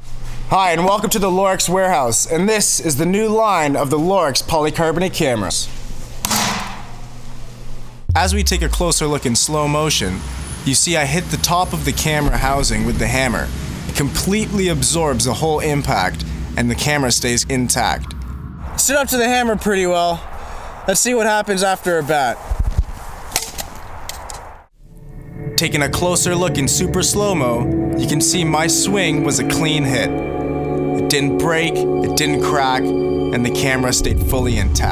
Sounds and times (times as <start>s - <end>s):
Speech: 0.5s - 5.7s, 8.1s - 18.1s, 18.8s - 20.3s, 20.9s - 22.4s, 25.6s - 30.1s, 31.0s - 34.9s.